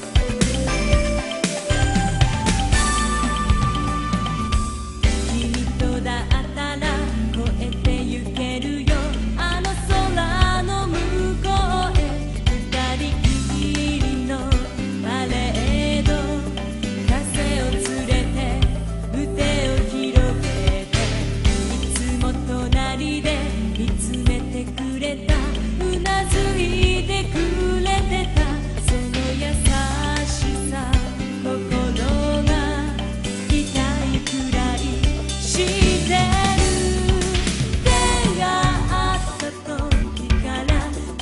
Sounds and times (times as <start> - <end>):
Music: 0.0 - 41.2.